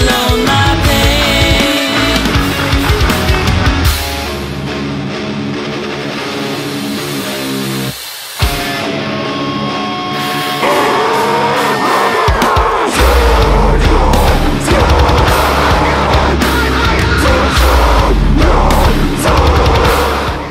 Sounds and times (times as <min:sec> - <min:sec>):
Independent music: 0:00.0 - 0:20.5
Scary music: 0:02.2 - 0:20.5.